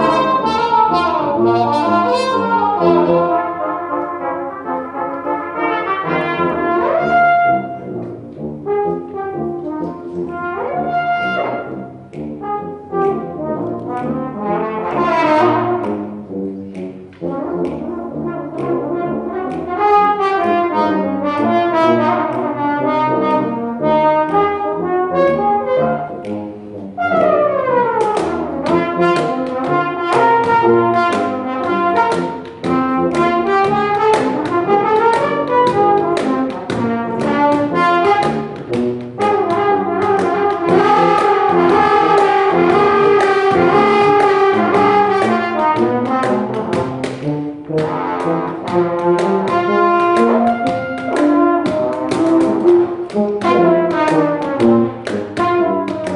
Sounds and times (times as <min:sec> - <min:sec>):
Brass instrument: 0:00.0 - 0:56.1.